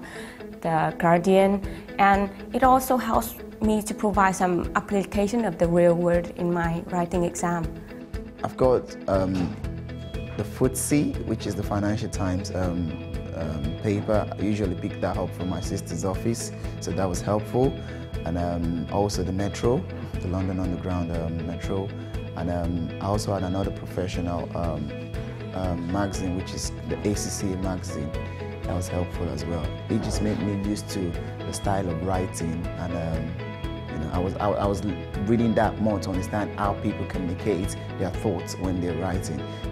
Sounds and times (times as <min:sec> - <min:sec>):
Music: 0:00.0 - 0:39.7
Speech: 0:18.3 - 0:24.9, 0:28.7 - 0:33.3.